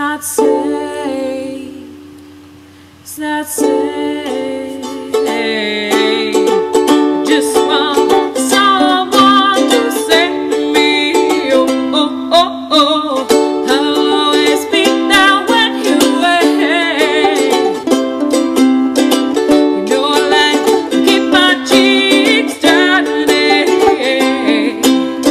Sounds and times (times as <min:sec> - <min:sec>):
Mandolin: 0:00.0 - 0:25.3
Ukulele: 0:00.0 - 0:25.3.